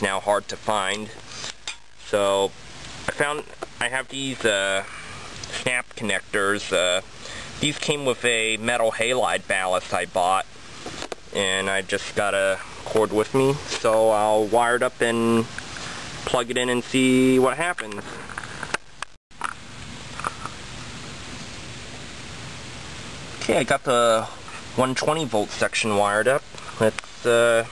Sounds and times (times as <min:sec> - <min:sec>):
Speech: 0:00.0 - 0:01.2, 0:02.0 - 0:02.5, 0:03.1 - 0:04.9, 0:05.5 - 0:10.5, 0:11.3 - 0:15.5, 0:16.2 - 0:18.2, 0:23.4 - 0:27.7.